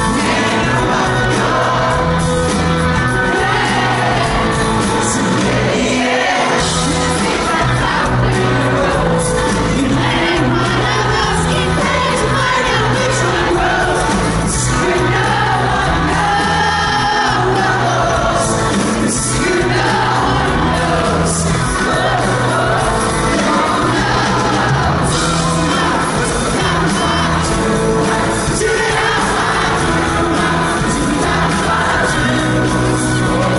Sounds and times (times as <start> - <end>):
Choir: 0.0 - 33.5
Male singing: 5.0 - 33.5.